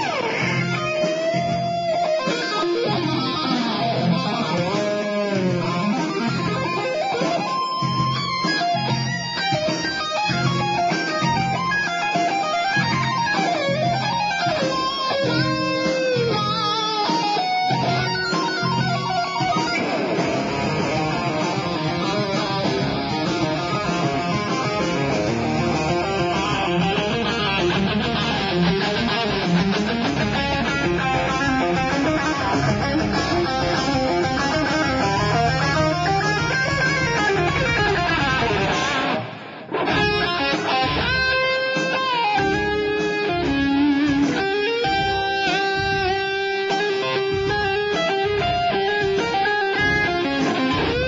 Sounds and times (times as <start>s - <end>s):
Guitar: 0.0s - 51.0s
Heavy metal: 0.0s - 51.0s.